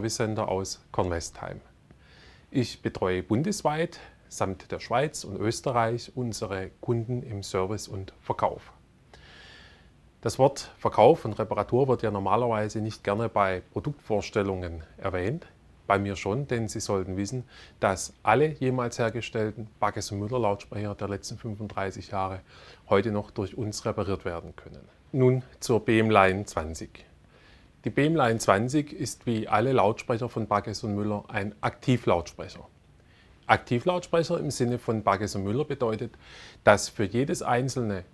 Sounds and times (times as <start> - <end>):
Speech: 0.0 - 1.7, 2.5 - 8.8, 10.2 - 27.1, 27.8 - 32.7, 33.5 - 38.1.